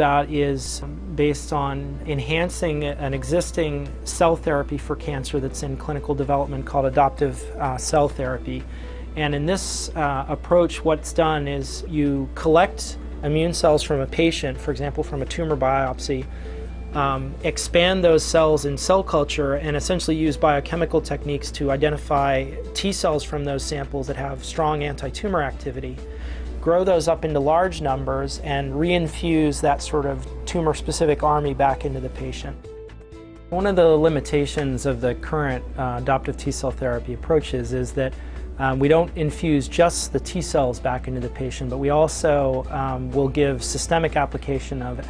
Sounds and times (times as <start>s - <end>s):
Speech: 0.0s - 16.3s, 16.9s - 26.0s, 26.6s - 32.6s, 33.5s - 45.1s
Music: 0.0s - 45.1s.